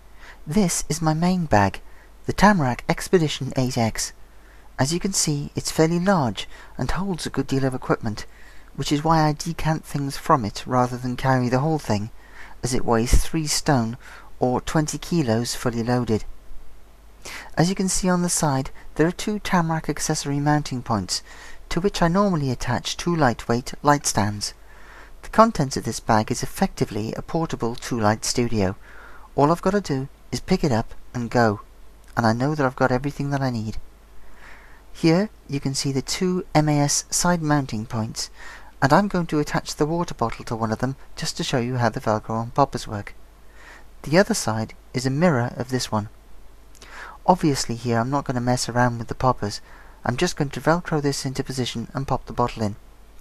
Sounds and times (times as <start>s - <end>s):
Speech: 0.5s - 4.2s, 4.8s - 16.3s, 17.4s - 24.6s, 25.2s - 28.8s, 29.4s - 33.8s, 35.0s - 43.2s, 44.0s - 46.2s, 47.2s - 52.8s.